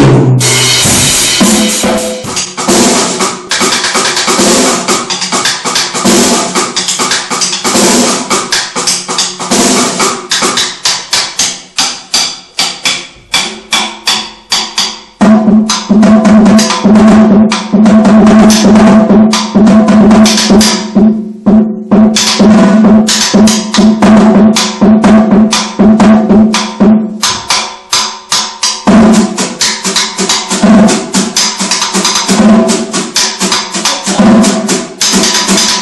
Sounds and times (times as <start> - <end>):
Drum roll: 0.0 - 11.9, 12.8 - 35.8.